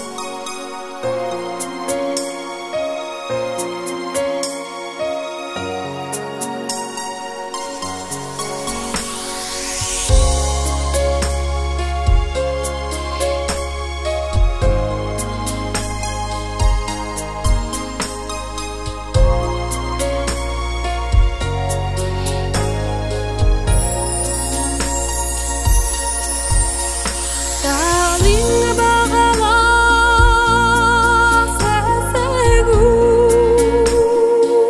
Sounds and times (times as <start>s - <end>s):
Music: 0.0s - 34.6s.